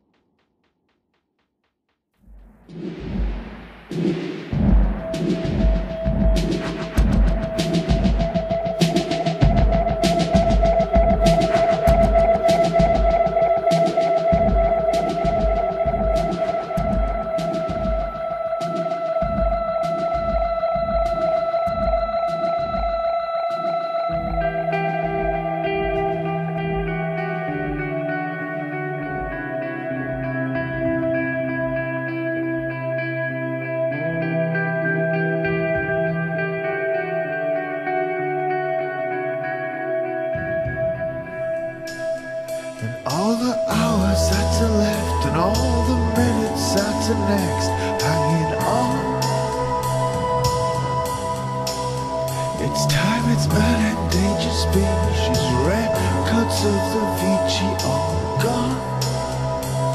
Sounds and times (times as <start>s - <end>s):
Music: 2.2s - 59.9s.